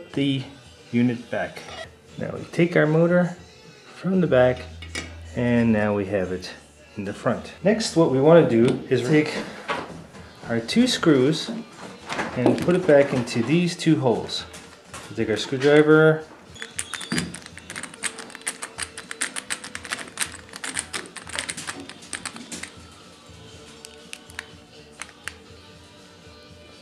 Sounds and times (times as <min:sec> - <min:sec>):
Speech: 0:05.4 - 0:09.4, 0:10.5 - 0:11.6, 0:12.4 - 0:14.5, 0:15.1 - 0:16.2.